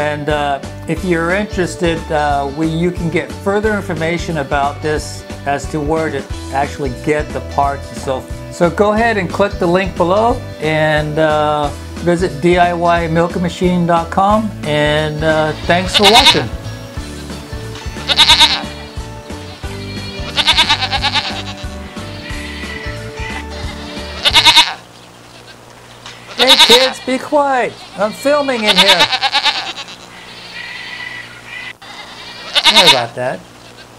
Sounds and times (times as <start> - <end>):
Speech: 0.0 - 16.6, 26.4 - 29.2, 32.6 - 33.4
Music: 0.0 - 29.0, 32.6 - 33.1
Bleat: 15.2 - 33.9.